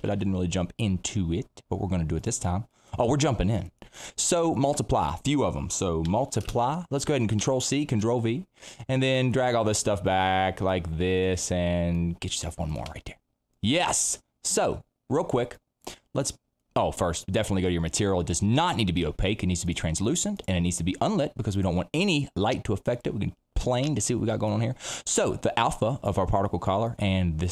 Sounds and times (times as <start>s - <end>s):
Speech: 0.0s - 27.5s.